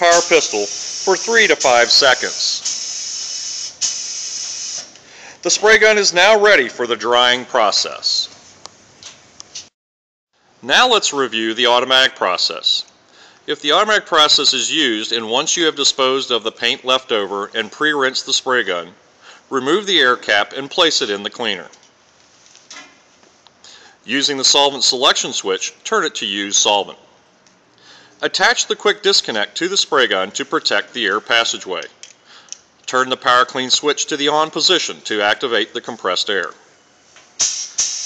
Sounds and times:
Speech: 0.0 - 2.7, 5.4 - 8.4, 10.6 - 12.9, 13.5 - 21.8, 24.1 - 27.1, 28.2 - 32.0, 32.9 - 36.6
Spray: 0.0 - 5.0, 37.4 - 38.0.

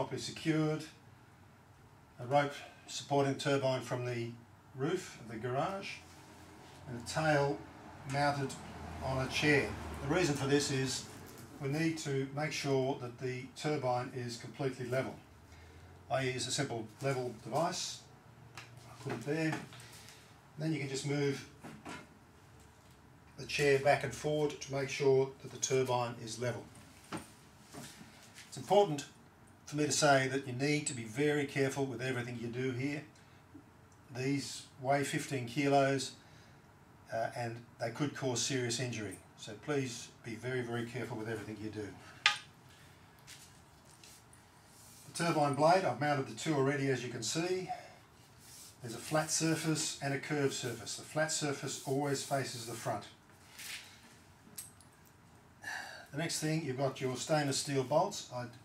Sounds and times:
Speech: 0.0 - 1.0, 2.2 - 6.0, 6.9 - 15.2, 16.1 - 18.1, 18.9 - 19.7, 20.6 - 21.6, 23.4 - 26.7, 28.5 - 33.1, 34.1 - 36.2, 37.1 - 42.0, 45.1 - 48.0, 48.8 - 53.2, 56.1 - 58.6.

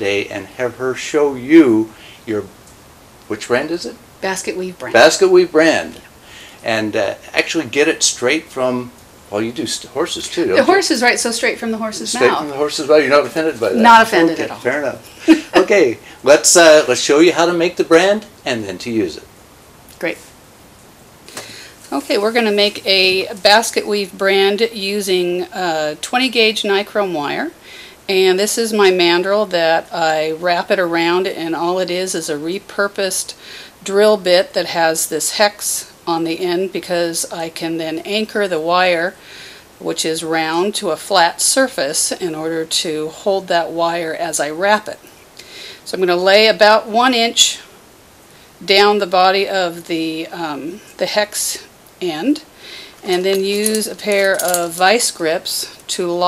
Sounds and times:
Speech: 3.3 - 6.0, 6.6 - 19.3, 21.9 - 33.3, 39.8 - 45.0, 45.9 - 47.7, 48.6 - 52.4, 53.1 - 56.2.

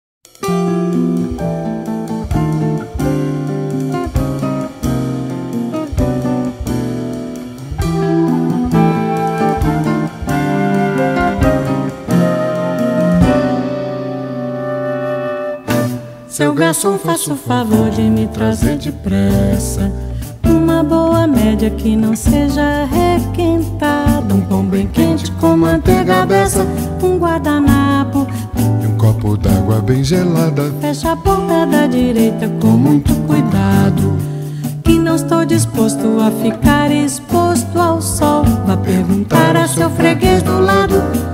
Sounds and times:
Music: 0.2 - 41.3.

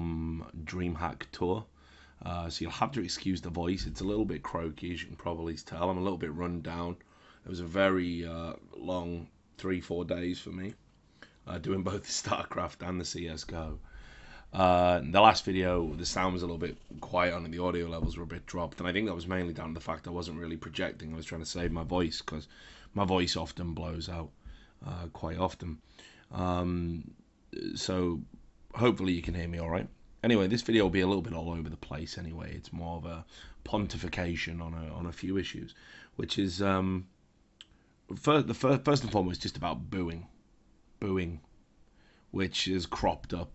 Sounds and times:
Speech: 0.0 - 10.8, 11.5 - 13.8, 14.6 - 37.1, 38.1 - 40.3, 41.0 - 41.5, 42.4 - 43.5.

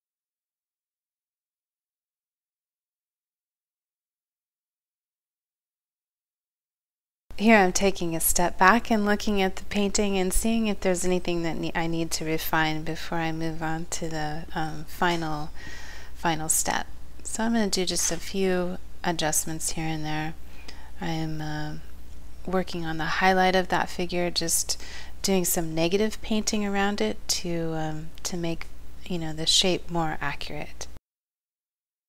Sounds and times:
Speech: 7.4 - 15.6, 16.2 - 20.4, 21.0 - 31.0.

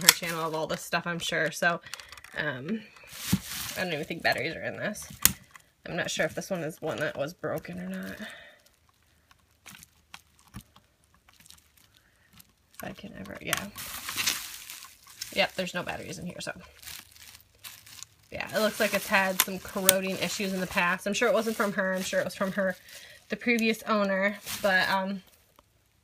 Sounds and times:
Speech: 0.0 - 1.8, 3.8 - 5.1, 5.9 - 8.3, 12.8 - 13.8, 15.3 - 16.7, 18.3 - 25.3.

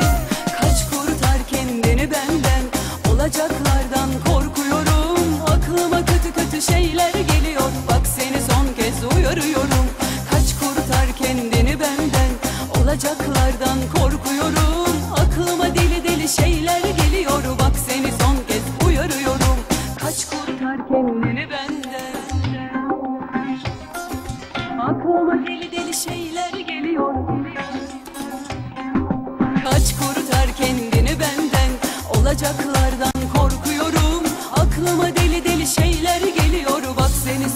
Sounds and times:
Middle Eastern music: 0.0 - 37.5.

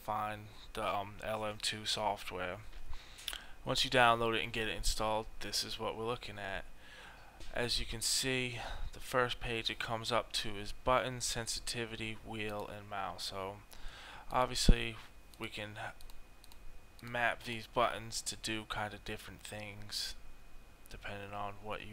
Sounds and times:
Speech: 0.0 - 2.7, 3.6 - 6.7, 7.5 - 13.6, 14.3 - 16.0, 17.0 - 20.2, 20.9 - 21.9.

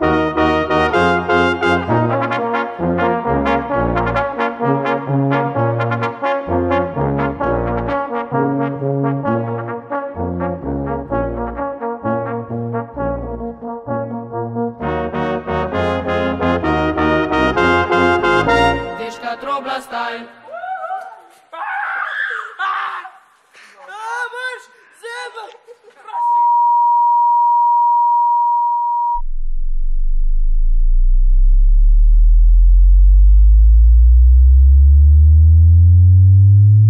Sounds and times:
Sine wave: 26.4 - 32.9.

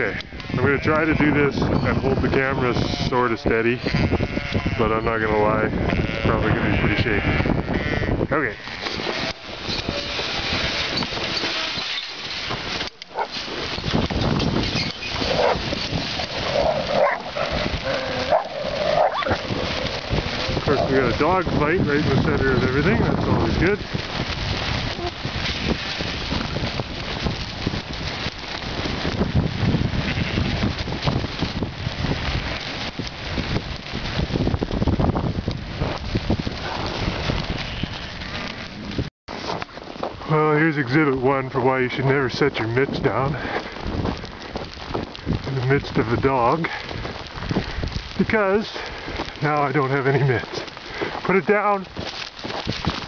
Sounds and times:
Speech: 0.0 - 3.8, 4.8 - 7.3, 8.3 - 8.6, 20.7 - 23.8, 40.3 - 43.4, 45.5 - 46.8, 48.2 - 48.8, 49.4 - 50.6, 51.3 - 51.9
Bleat: 0.0 - 10.8, 30.0 - 30.6, 37.7 - 38.1.

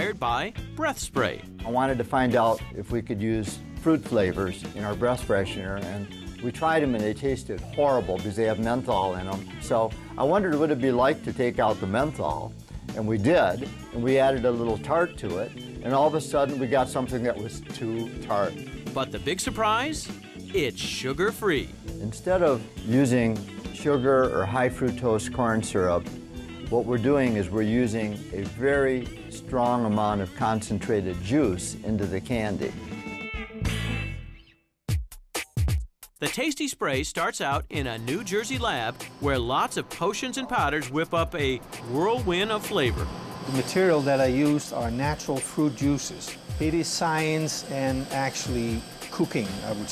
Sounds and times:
Speech: 0.0 - 26.0, 26.7 - 32.8, 36.2 - 49.9
Music: 0.0 - 49.9.

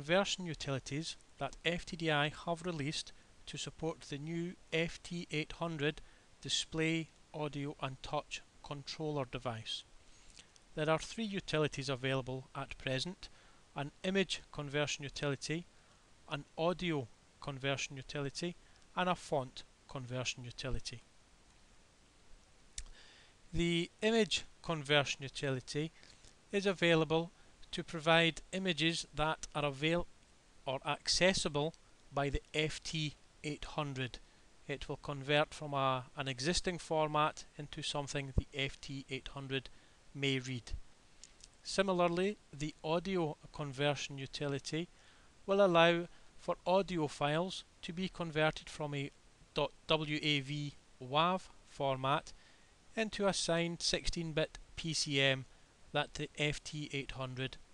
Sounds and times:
Speech: 0.0 - 9.9, 10.8 - 15.7, 16.3 - 21.1, 23.5 - 30.1, 30.7 - 40.8, 41.6 - 44.9, 45.5 - 52.3, 53.0 - 57.6.

